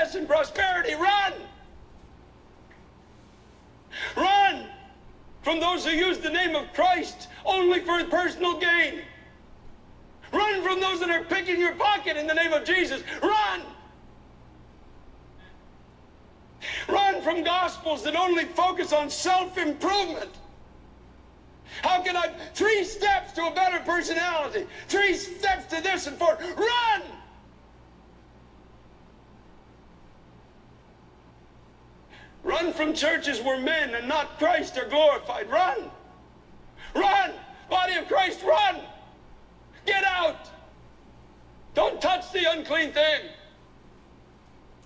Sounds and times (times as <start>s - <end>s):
Speech: 0.0s - 1.7s, 4.1s - 9.2s, 10.3s - 13.9s, 16.8s - 20.5s, 21.8s - 27.4s, 32.4s - 36.1s, 36.9s - 39.1s, 39.8s - 40.7s, 41.8s - 43.6s.